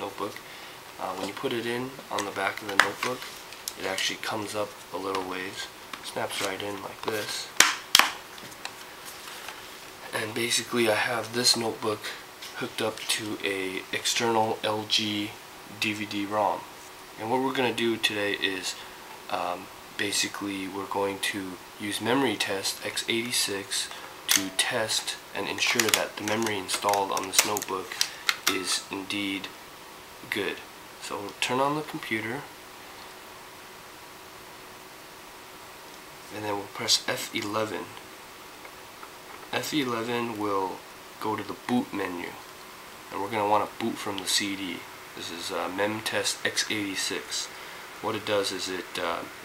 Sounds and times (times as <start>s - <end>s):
Speech: 0.0s - 0.4s, 1.0s - 7.6s, 10.0s - 29.6s, 30.2s - 32.5s, 36.3s - 38.0s, 39.5s - 42.4s, 43.1s - 49.4s.